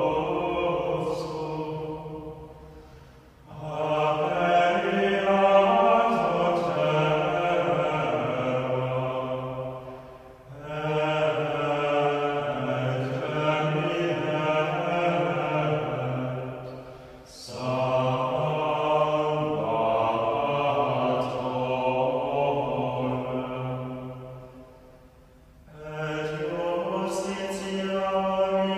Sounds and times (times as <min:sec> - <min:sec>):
Mantra: 0:00.0 - 0:02.4, 0:03.5 - 0:24.4, 0:25.7 - 0:28.7.